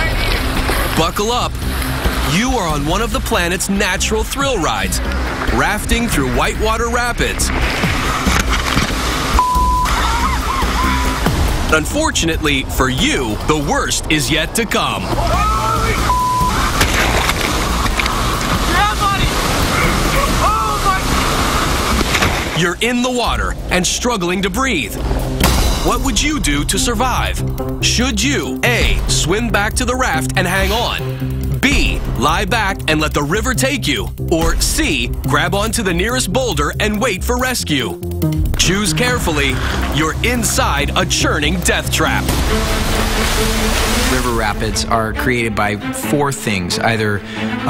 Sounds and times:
Speech: 0.0 - 1.5, 2.3 - 7.5, 11.7 - 16.1, 22.6 - 25.0, 25.8 - 38.0, 38.6 - 42.3, 44.1 - 47.6
Music: 0.0 - 47.6.

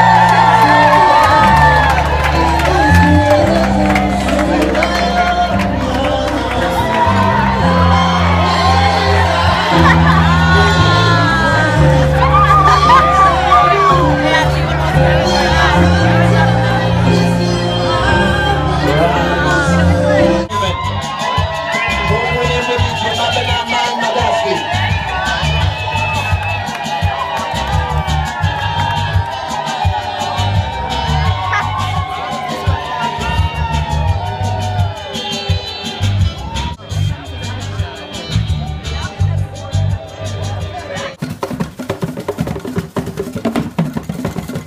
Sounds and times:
Shout: 0.0 - 5.6, 6.4 - 17.1, 20.5 - 36.8
Music: 0.0 - 44.6.

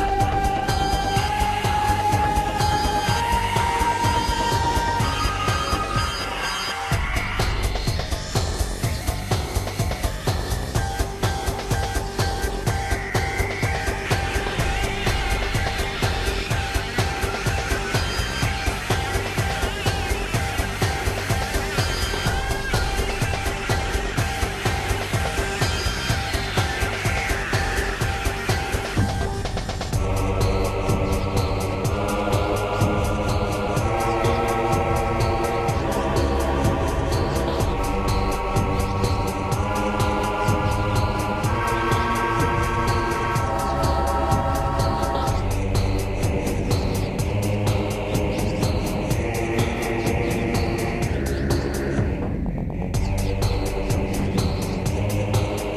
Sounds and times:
Music: 0.0 - 55.7.

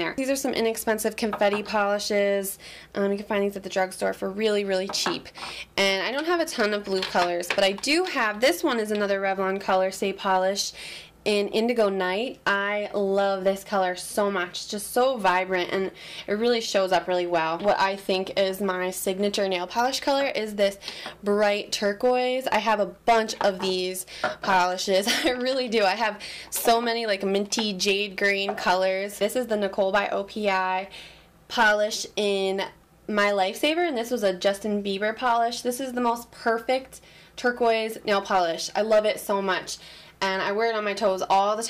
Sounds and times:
Speech: 0.0 - 30.9, 31.5 - 41.6
Inside, small room: 0.0 - 41.6.

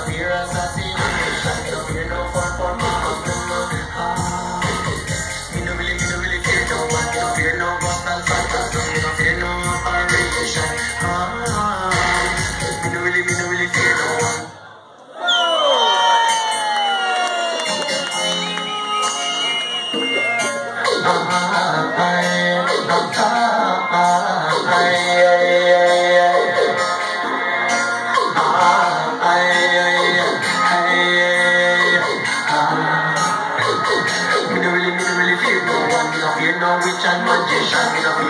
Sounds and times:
Music: 0.0 - 14.6, 16.0 - 38.2.

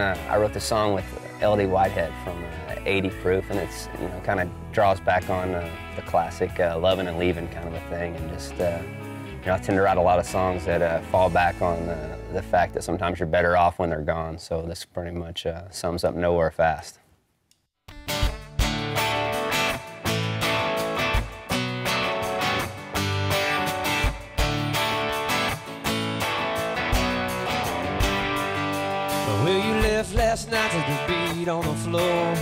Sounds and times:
Speech: 0.0 - 17.0.

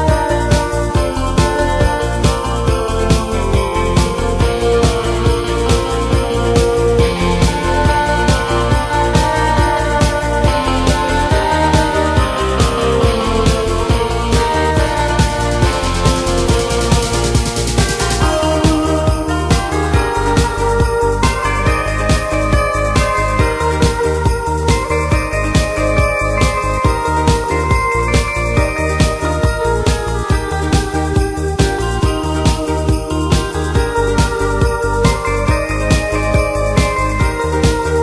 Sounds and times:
Electric guitar: 0.0 - 38.0
Strum: 0.0 - 38.0.

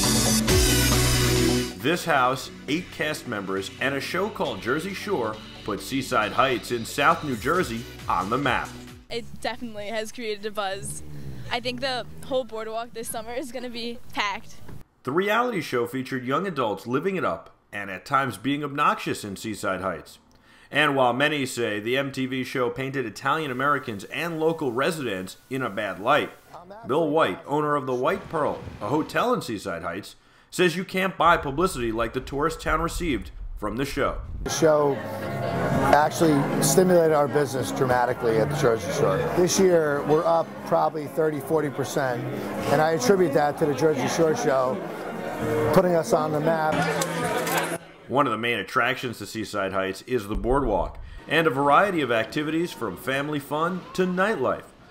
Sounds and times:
Speech: 1.8 - 35.0, 35.8 - 44.8, 45.5 - 54.7.

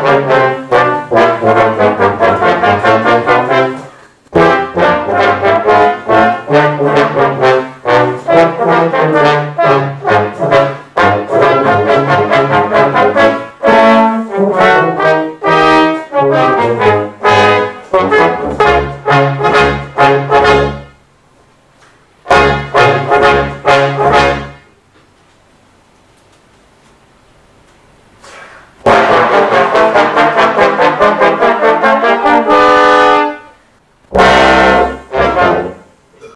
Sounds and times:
Trombone: 0.0 - 21.1, 22.2 - 24.8, 28.8 - 36.3
Trumpet: 0.0 - 21.1, 22.2 - 24.8, 28.8 - 36.3.

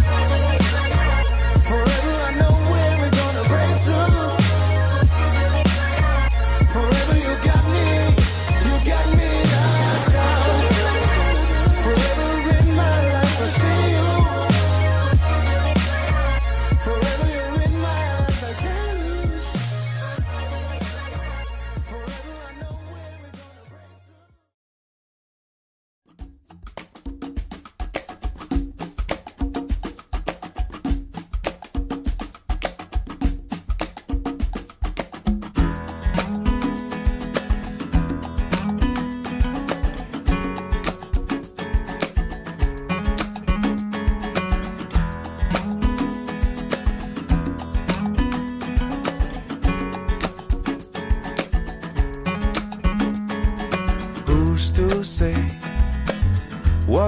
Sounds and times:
Wood block: 26.4 - 57.0.

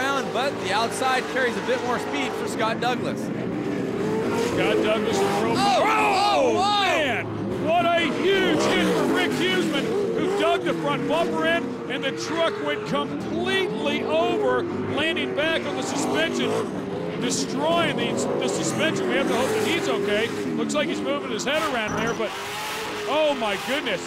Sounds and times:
Speech: 0.0 - 3.2, 4.6 - 16.6, 17.2 - 22.3, 23.1 - 24.0
Truck: 0.0 - 24.0.

